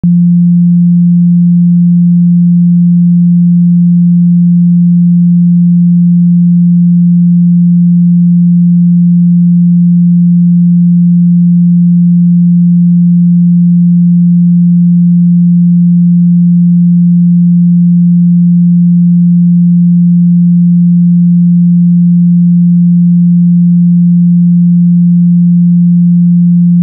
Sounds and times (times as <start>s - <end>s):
Sine wave: 0.0s - 26.8s.